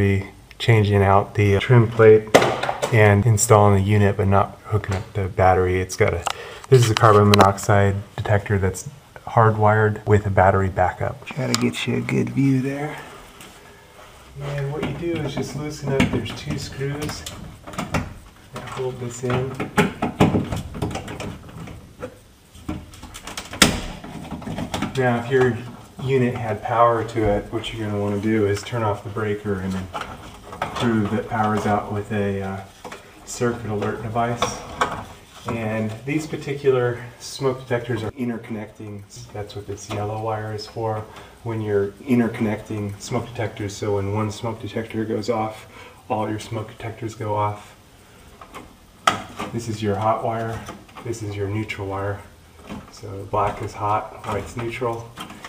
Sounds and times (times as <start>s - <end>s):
Speech: 0.0s - 13.2s, 14.4s - 17.4s, 18.5s - 19.8s, 24.8s - 30.0s, 30.7s - 47.8s, 49.4s - 55.2s.